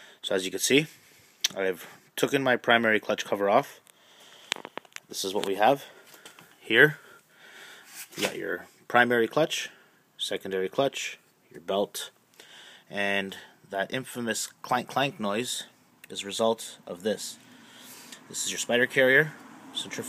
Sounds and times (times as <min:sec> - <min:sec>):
Speech: 0:00.2 - 0:00.9, 0:01.5 - 0:03.8, 0:05.1 - 0:06.0, 0:06.6 - 0:07.0, 0:08.2 - 0:12.2, 0:12.9 - 0:17.4, 0:18.3 - 0:20.0.